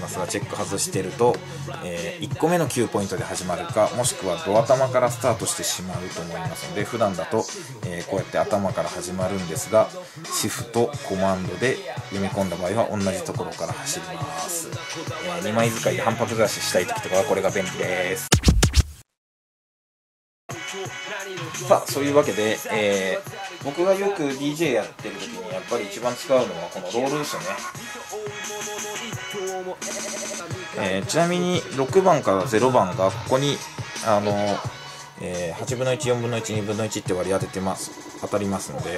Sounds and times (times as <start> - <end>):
Speech: 0.0 - 18.3, 21.4 - 27.7, 30.7 - 38.9
Music: 0.0 - 18.9, 20.5 - 38.9.